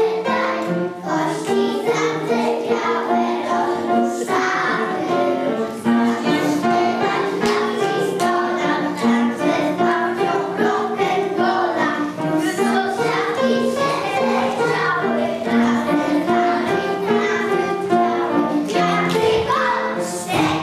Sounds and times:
Music: 0.0 - 20.6.

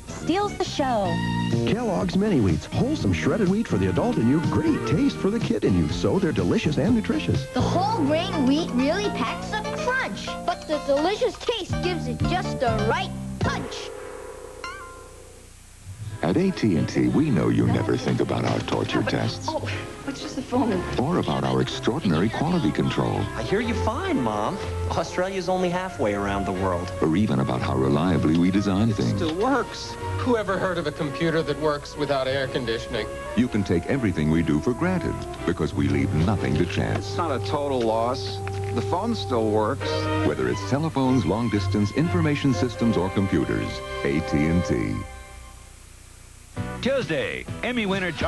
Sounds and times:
Music: 0.0 - 14.2, 15.9 - 45.8, 46.5 - 48.2
Speech: 16.2 - 45.0, 46.8 - 48.2.

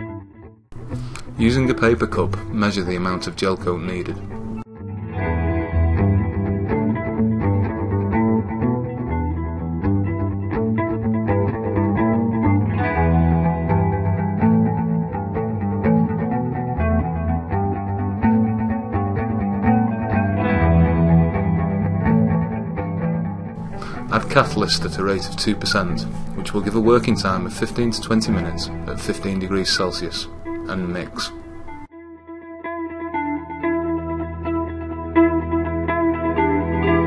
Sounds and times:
Music: 0.0 - 37.0
Speech: 1.4 - 4.3, 24.1 - 31.4.

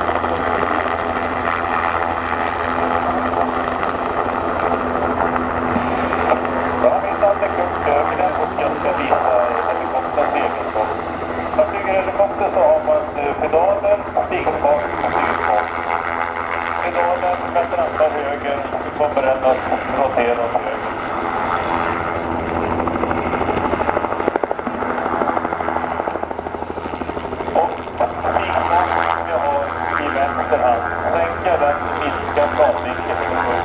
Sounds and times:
Speech: 0.2 - 1.0, 6.8 - 15.8, 16.8 - 20.9, 27.5 - 33.6.

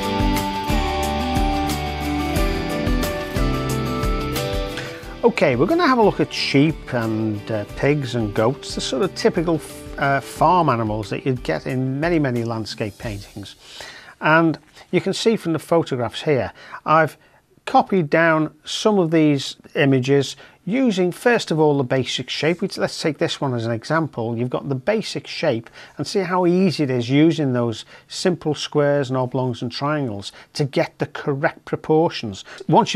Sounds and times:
Speech: 5.2 - 13.6, 14.2 - 32.9.

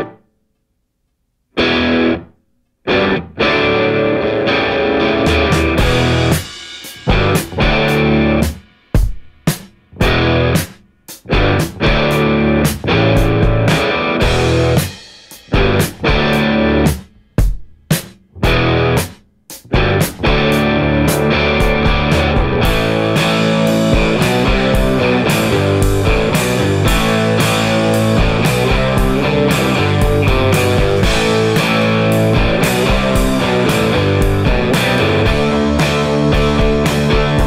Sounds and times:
Music: 0.0 - 0.8, 1.5 - 37.4.

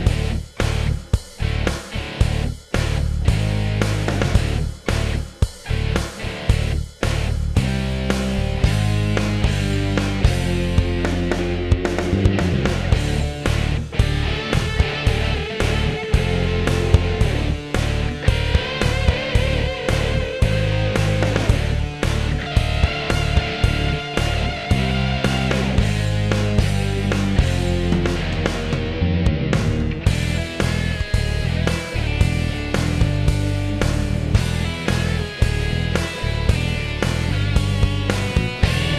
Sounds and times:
Music: 0.0 - 38.9.

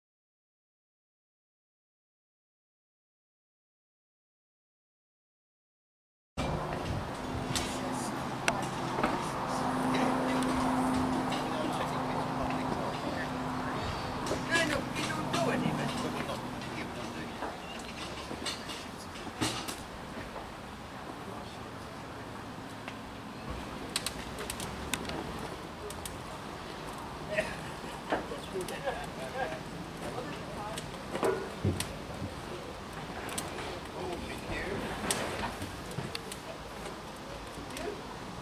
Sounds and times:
Speech: 7.6 - 17.7, 28.2 - 31.2, 33.4 - 35.1, 36.0 - 38.2.

